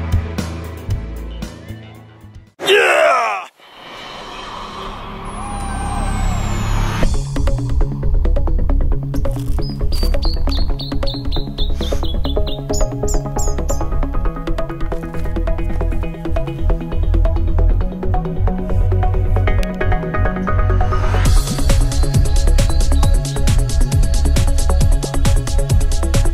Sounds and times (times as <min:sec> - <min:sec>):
Music: 0:00.0 - 0:02.6, 0:03.8 - 0:26.3
Outside, rural or natural: 0:02.6 - 0:26.3.